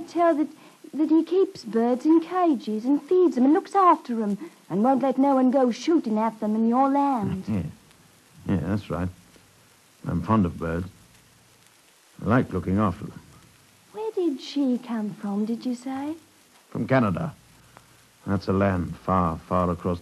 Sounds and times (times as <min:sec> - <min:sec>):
Speech: 0:00.0 - 0:07.8, 0:08.4 - 0:09.2, 0:10.0 - 0:10.9, 0:12.2 - 0:13.2, 0:14.0 - 0:17.4, 0:18.2 - 0:20.0.